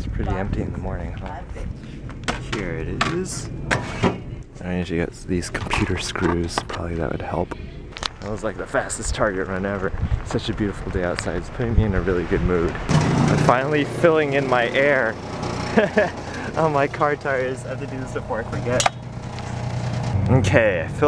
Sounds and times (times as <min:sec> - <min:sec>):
Speech: 0:00.0 - 0:01.7, 0:02.4 - 0:03.5, 0:04.6 - 0:07.6, 0:08.2 - 0:15.2, 0:16.6 - 0:18.9, 0:20.3 - 0:21.0
Outside, urban or manmade: 0:00.0 - 0:21.0.